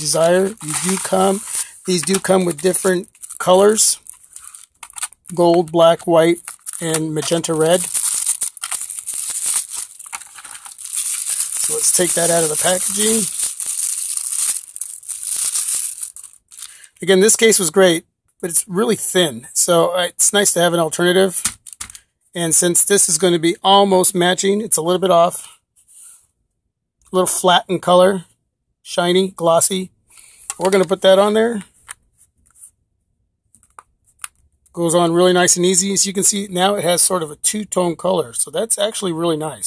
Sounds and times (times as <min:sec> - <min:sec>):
Speech: 0:00.0 - 0:04.0, 0:05.3 - 0:08.0, 0:11.6 - 0:13.3, 0:17.0 - 0:21.4, 0:22.4 - 0:25.6, 0:27.1 - 0:28.3, 0:28.9 - 0:29.9, 0:30.6 - 0:31.7, 0:34.8 - 0:39.6.